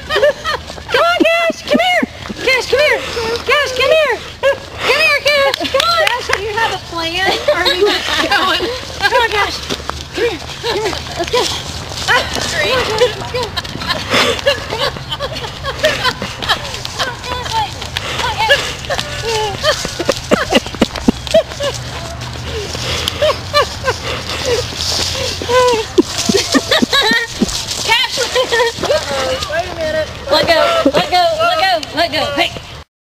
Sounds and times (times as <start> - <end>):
Clip-clop: 0.0 - 32.8.